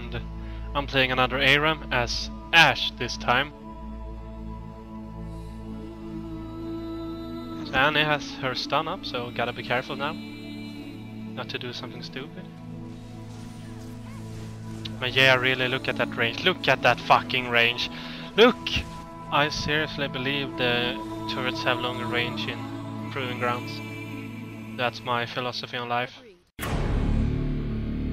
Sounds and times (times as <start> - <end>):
Music: 0.0 - 28.1
Speech: 0.8 - 3.5, 7.6 - 10.3, 11.4 - 12.5, 14.9 - 24.0, 24.8 - 26.5.